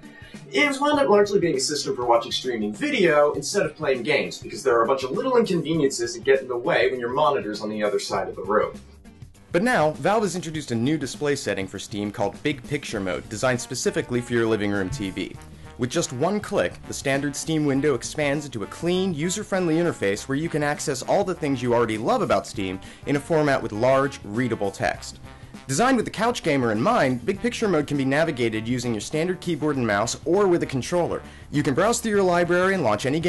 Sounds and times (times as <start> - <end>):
Music: 0.0 - 33.2
Speech: 0.5 - 8.8, 9.6 - 33.2.